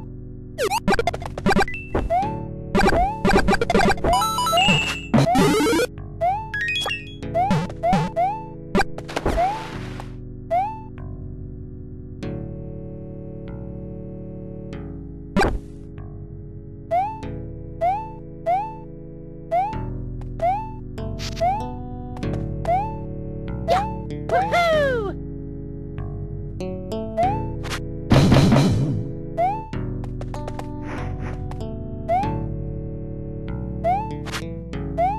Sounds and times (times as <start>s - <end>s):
Video game music: 0.0s - 35.1s.